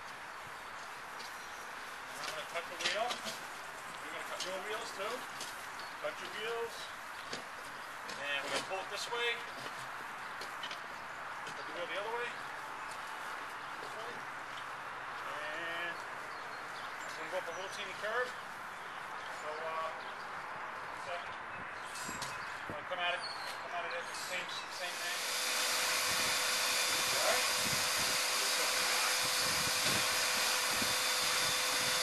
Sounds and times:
Speech: 4.0s - 5.2s, 8.2s - 9.4s, 11.7s - 12.4s, 17.2s - 18.4s, 19.4s - 20.0s, 22.7s - 25.2s
Steam: 24.2s - 32.0s.

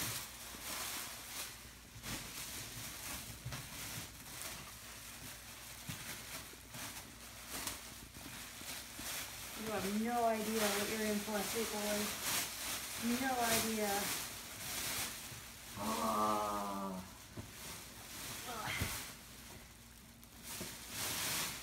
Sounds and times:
Speech: 9.6s - 12.2s, 13.0s - 14.2s.

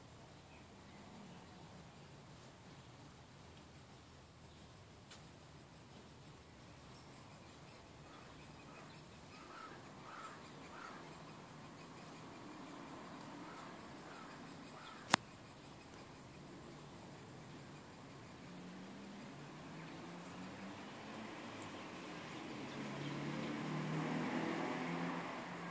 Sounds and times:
Bird: 5.9s - 20.9s.

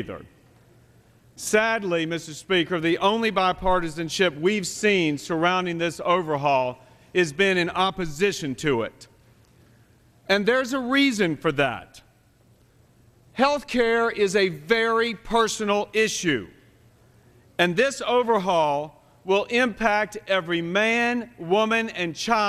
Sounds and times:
Speech: 0.0s - 0.3s, 1.4s - 9.1s, 10.3s - 12.1s, 13.4s - 16.5s, 17.6s - 22.4s.

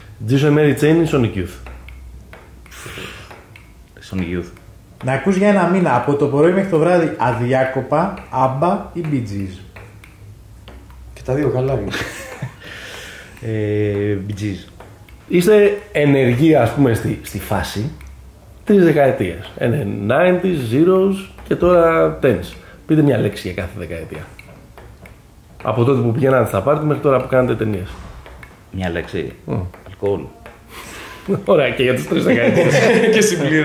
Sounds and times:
Speech: 0.2s - 1.6s, 4.0s - 9.6s, 11.2s - 12.0s, 13.4s - 14.7s, 15.3s - 18.0s, 18.7s - 24.3s, 25.6s - 28.0s, 28.8s - 30.3s, 31.3s - 33.6s.

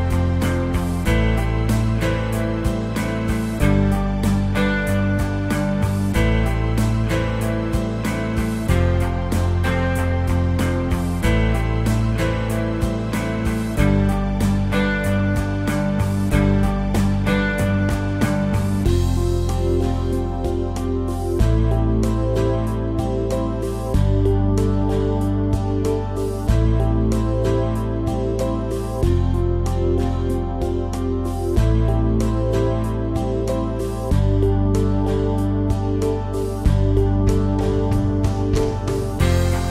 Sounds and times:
Music: 0.0s - 39.7s.

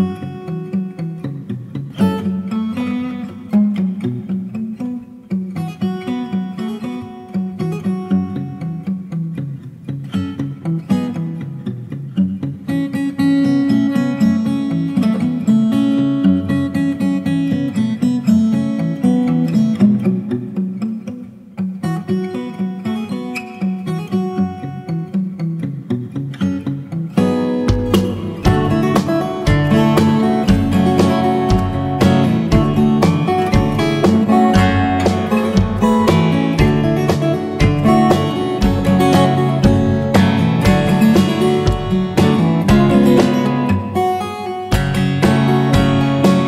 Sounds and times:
Acoustic guitar: 0.0s - 46.4s.

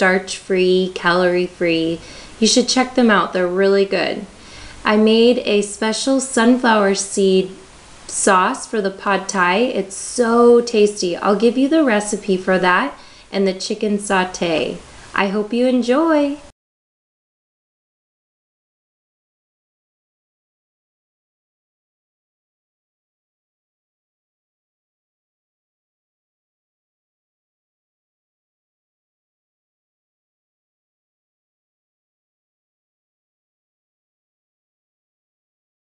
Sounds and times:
Speech: 0.0s - 16.5s.

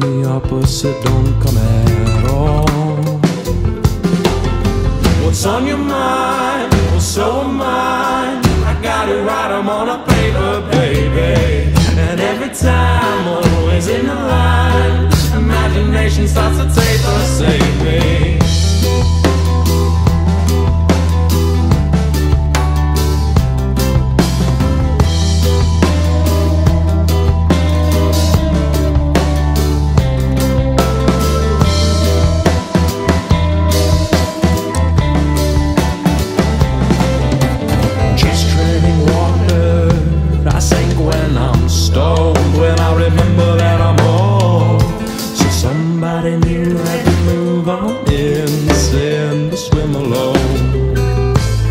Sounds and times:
Ska: 0.0s - 51.7s.

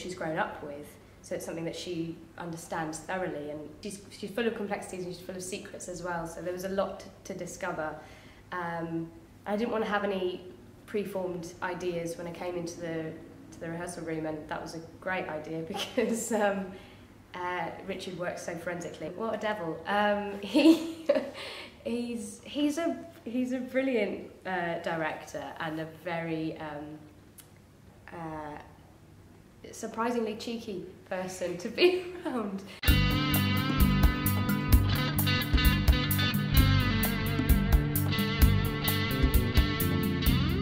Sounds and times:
Speech: 0.0s - 8.0s, 8.6s - 27.1s, 28.1s - 28.8s, 29.6s - 32.8s.

